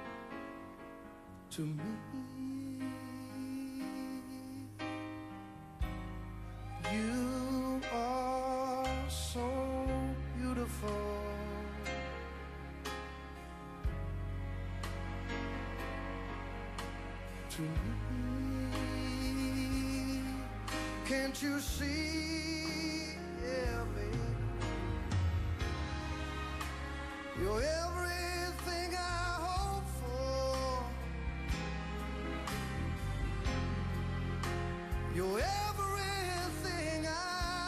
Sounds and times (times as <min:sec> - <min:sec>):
Music: 0:00.0 - 0:37.6.